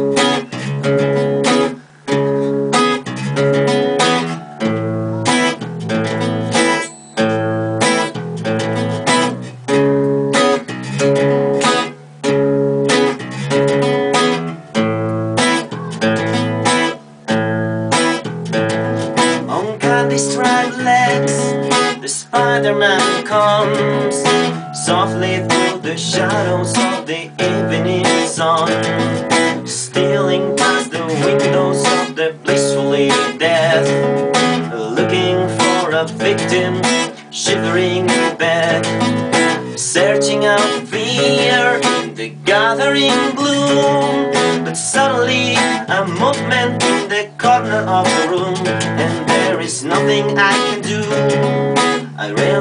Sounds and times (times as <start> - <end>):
Music: 0.0 - 52.6.